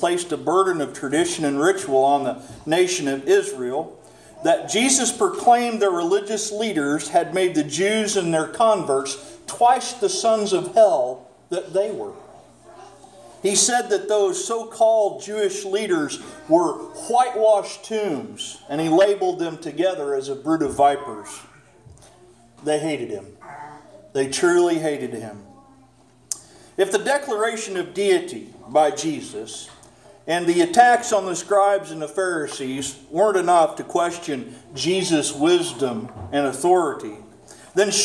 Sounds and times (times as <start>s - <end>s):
Speech: 0.0s - 21.7s, 26.8s - 38.0s
Inside, large room or hall: 0.0s - 38.0s.